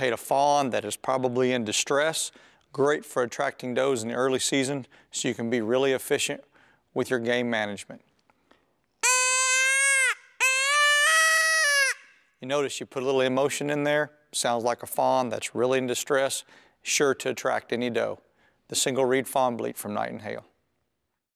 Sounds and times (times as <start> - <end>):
Speech: 0.0 - 8.1, 12.4 - 20.6.